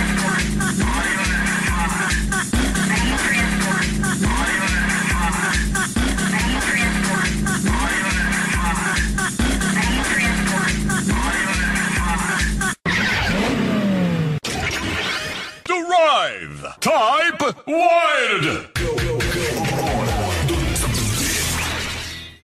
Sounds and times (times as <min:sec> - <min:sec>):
Music: 0:00.0 - 0:12.8, 0:18.7 - 0:22.4
Speech: 0:06.3 - 0:09.0, 0:09.6 - 0:12.4, 0:15.7 - 0:20.8.